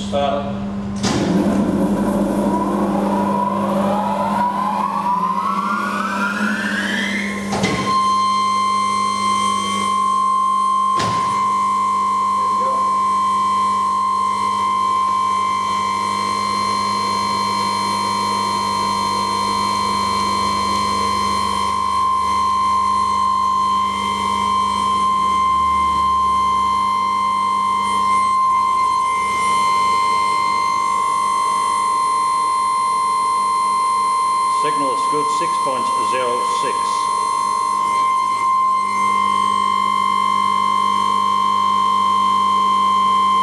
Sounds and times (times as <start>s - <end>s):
Sine wave: 0.6s - 43.4s.